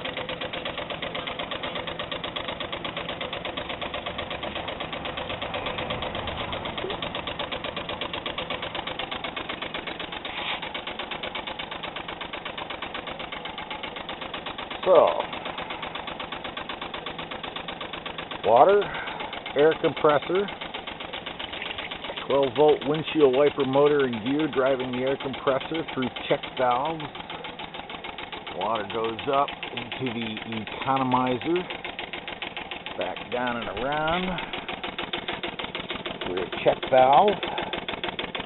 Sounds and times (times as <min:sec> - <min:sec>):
Speech: 0:14.8 - 0:15.3, 0:18.5 - 0:18.9, 0:19.6 - 0:20.6, 0:22.2 - 0:27.1, 0:28.5 - 0:31.7, 0:33.0 - 0:34.4, 0:36.3 - 0:37.7.